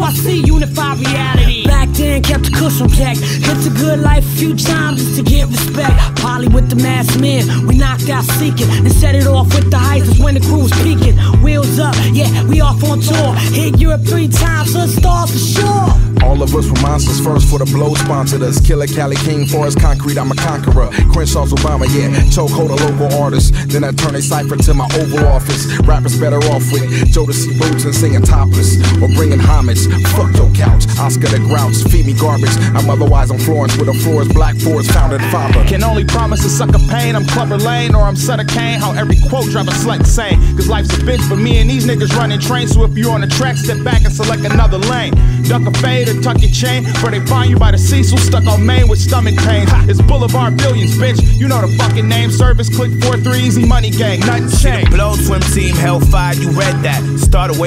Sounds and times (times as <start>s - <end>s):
Music: 0.0s - 57.6s
Rapping: 0.0s - 57.6s.